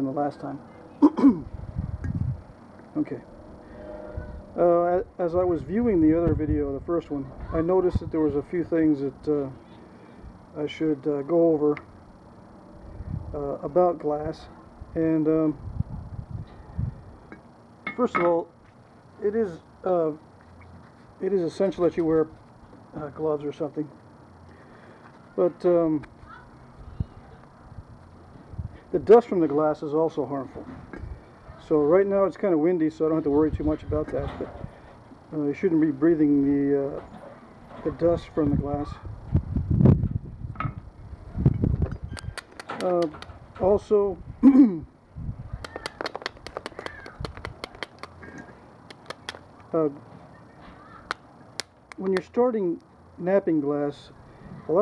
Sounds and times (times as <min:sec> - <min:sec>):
Speech: 0:00.0 - 0:00.6, 0:02.9 - 0:03.2, 0:04.6 - 0:09.6, 0:10.6 - 0:11.8, 0:19.2 - 0:20.2, 0:21.2 - 0:22.3, 0:22.9 - 0:23.9, 0:28.9 - 0:30.8, 0:31.6 - 0:34.5, 0:35.3 - 0:37.1, 0:37.8 - 0:39.1, 0:42.8 - 0:44.9, 0:49.7 - 0:50.0, 0:52.0 - 0:54.1.